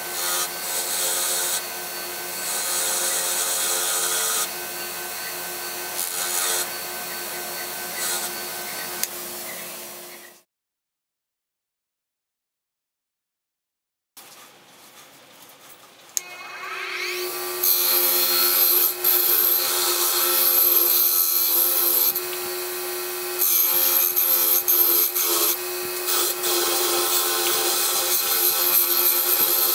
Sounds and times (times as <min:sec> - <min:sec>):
Filing (rasp): 0:00.0 - 0:09.1, 0:17.0 - 0:29.7.